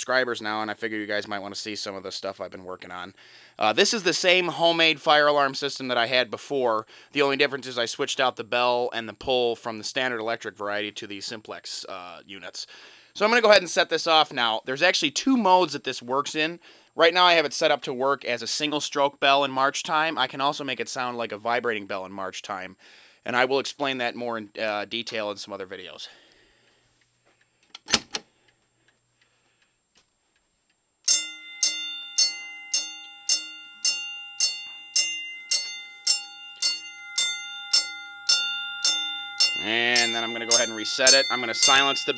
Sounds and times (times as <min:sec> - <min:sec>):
Speech: 0:00.0 - 0:26.2, 0:39.6 - 0:42.1.